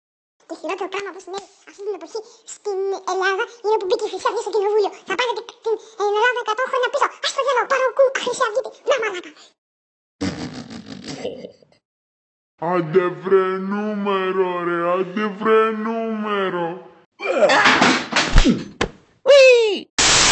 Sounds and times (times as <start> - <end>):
Speech: 0.5 - 9.5, 12.6 - 17.7, 19.3 - 19.9.